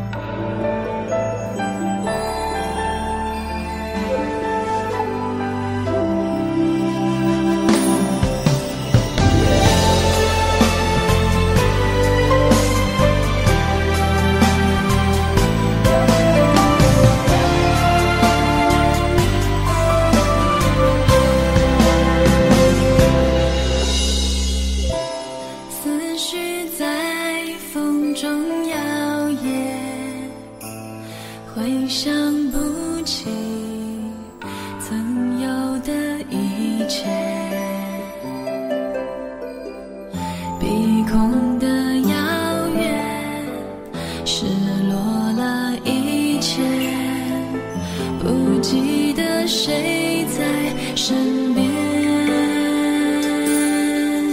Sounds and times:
Theme music: 0.0 - 26.0.

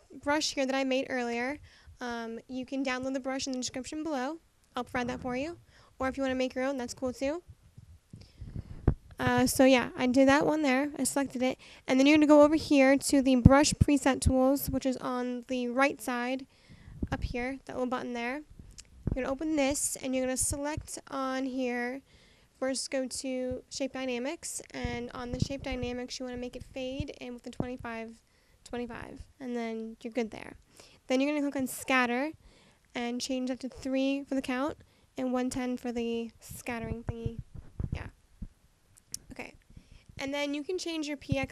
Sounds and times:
Speech: 0.0 - 7.4, 9.2 - 16.5, 17.1 - 18.5, 19.2 - 22.0, 22.6 - 32.4, 33.0 - 38.1, 39.2 - 39.6, 40.2 - 41.5.

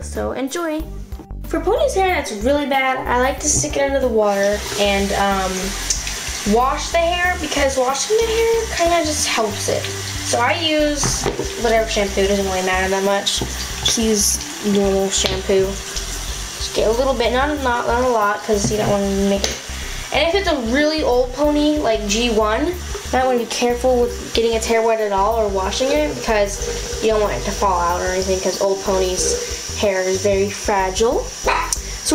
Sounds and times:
Speech: 0.0 - 0.9, 1.5 - 5.9, 6.5 - 15.8, 16.6 - 31.3
Music: 0.0 - 32.1
Water tap, faucet: 2.6 - 32.1.

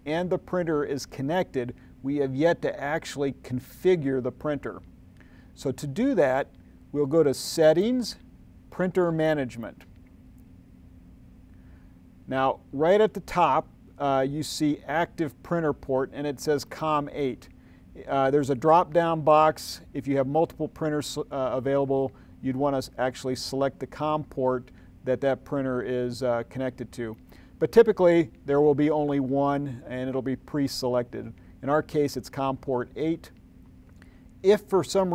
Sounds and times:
Speech: 0.0 - 4.9, 5.6 - 9.9, 12.3 - 33.4, 34.4 - 35.1.

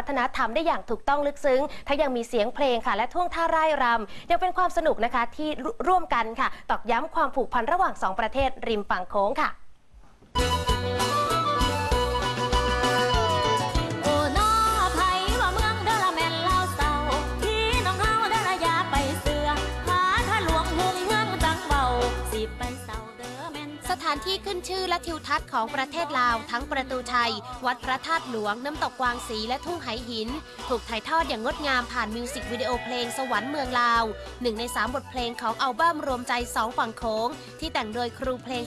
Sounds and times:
Speech: 0.0 - 9.6, 23.9 - 38.6
Music: 10.3 - 38.6.

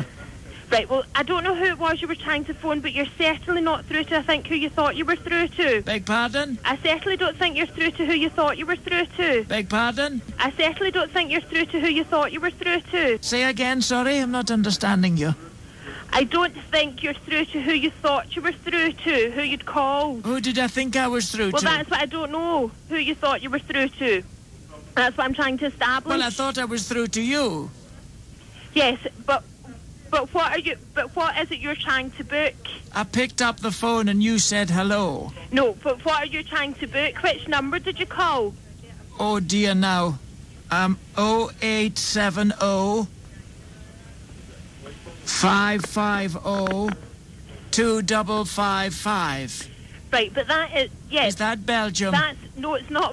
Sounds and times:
Speech: 0.0 - 43.1, 44.8 - 53.1.

